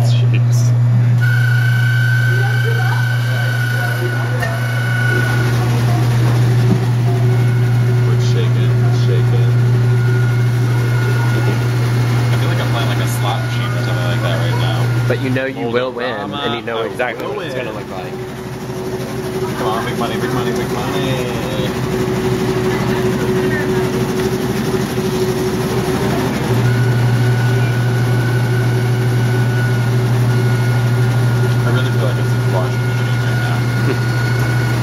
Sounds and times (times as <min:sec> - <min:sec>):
Speech: 0:08.0 - 0:09.6, 0:12.3 - 0:18.2, 0:19.5 - 0:21.8, 0:31.6 - 0:33.7.